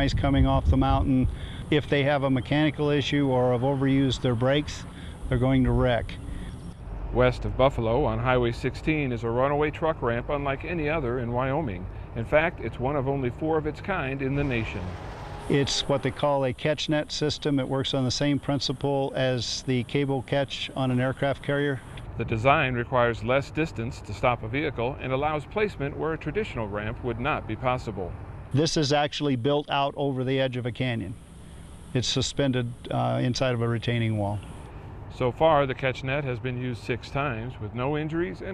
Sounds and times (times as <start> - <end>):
Speech: 0.0 - 6.2, 7.2 - 31.2, 32.0 - 34.5, 35.1 - 38.5
Vehicle: 0.0 - 38.5.